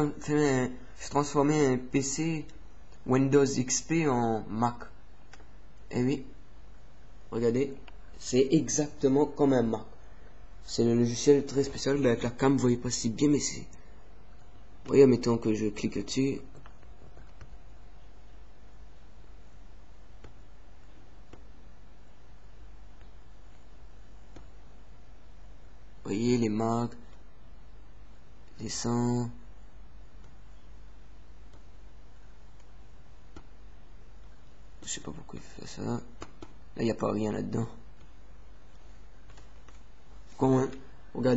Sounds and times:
Speech: 0.0 - 5.0, 5.9 - 6.4, 7.3 - 10.0, 10.6 - 13.8, 14.8 - 16.6, 26.0 - 27.1, 28.5 - 29.5, 34.8 - 36.2, 36.8 - 37.9, 40.4 - 41.3.

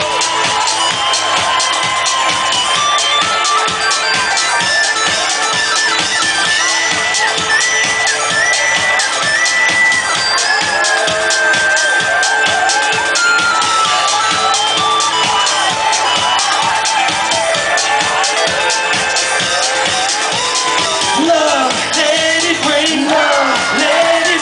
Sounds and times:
Music: 0.0 - 24.4.

